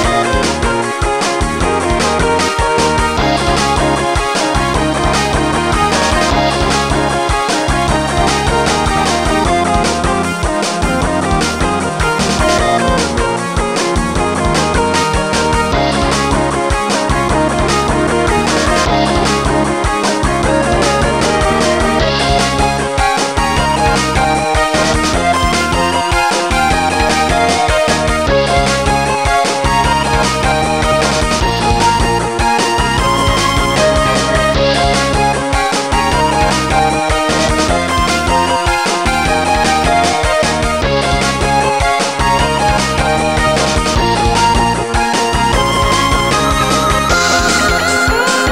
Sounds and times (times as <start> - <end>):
Blues: 0.0 - 48.5
Rhythm and blues: 0.0 - 48.5.